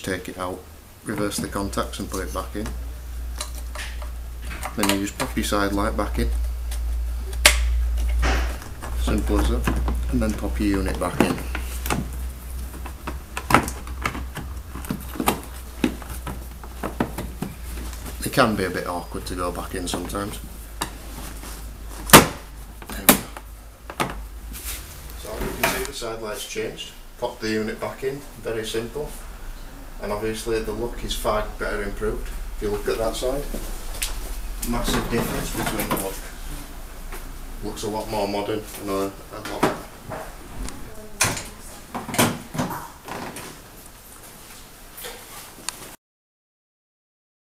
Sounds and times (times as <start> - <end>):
Speech: 0.0 - 2.8, 4.8 - 6.4, 9.0 - 11.4, 18.2 - 20.5, 25.2 - 29.2, 30.0 - 33.6, 34.6 - 36.4, 37.6 - 39.9.